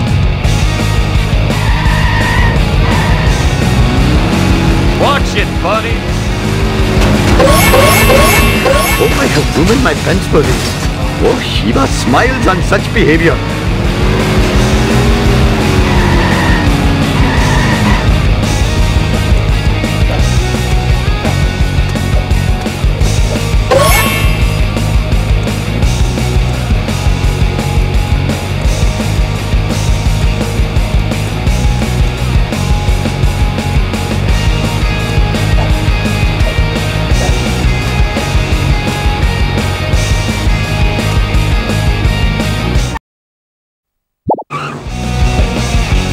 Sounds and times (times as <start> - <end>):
Music: 0.0 - 43.0, 44.6 - 46.1.